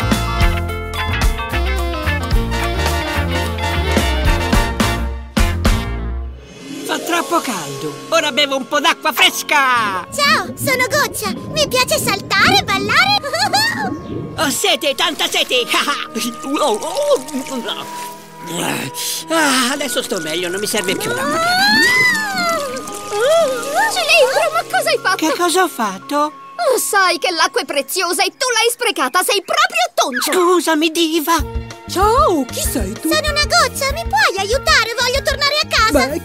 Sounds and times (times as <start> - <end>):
Music: 0.0 - 29.2, 30.3 - 36.2.